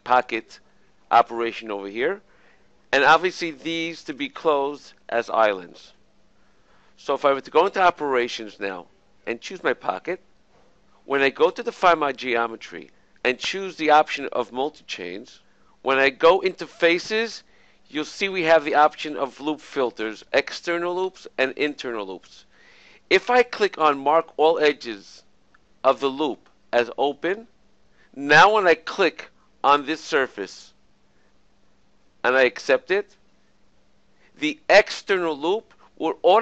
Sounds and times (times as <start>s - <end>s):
Speech: 0.0s - 2.2s, 3.0s - 5.9s, 7.0s - 10.2s, 11.1s - 22.4s, 23.1s - 25.2s, 25.9s - 27.5s, 28.2s - 30.8s, 32.3s - 33.1s, 34.4s - 36.4s.